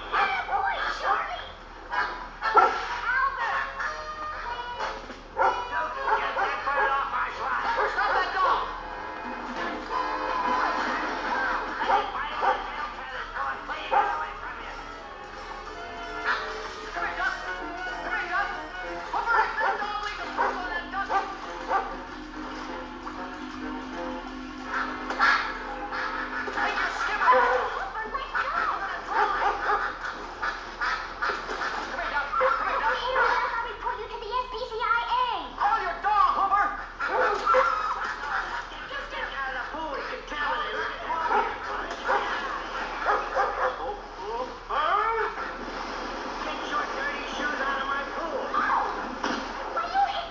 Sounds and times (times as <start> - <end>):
Speech: 0.0 - 8.8, 10.8 - 15.1, 16.3 - 21.9, 26.6 - 29.8, 31.8 - 45.5, 46.4 - 49.0
Music: 0.0 - 50.3.